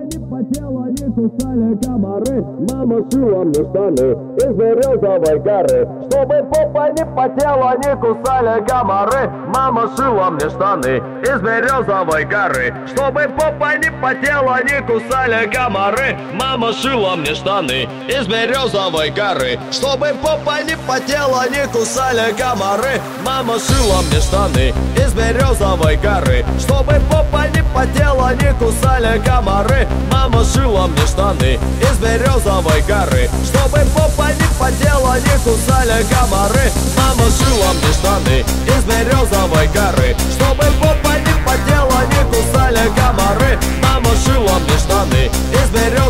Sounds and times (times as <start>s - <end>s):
Music: 0.0s - 46.0s.